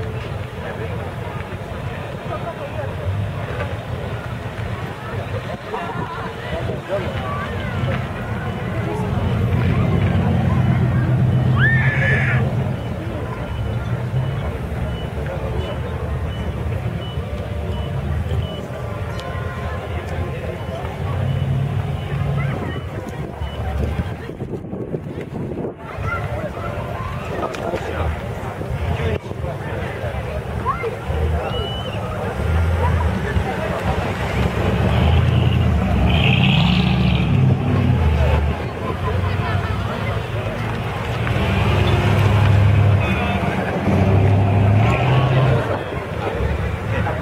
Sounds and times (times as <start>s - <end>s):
Speech: 0.0s - 47.2s.